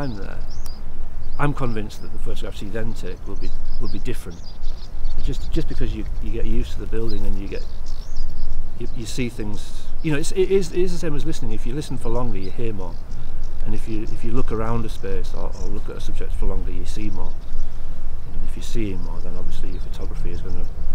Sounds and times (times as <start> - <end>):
Speech: 0.0 - 0.5, 1.4 - 4.4, 5.2 - 7.6, 8.8 - 13.0, 13.6 - 17.4, 18.4 - 20.7.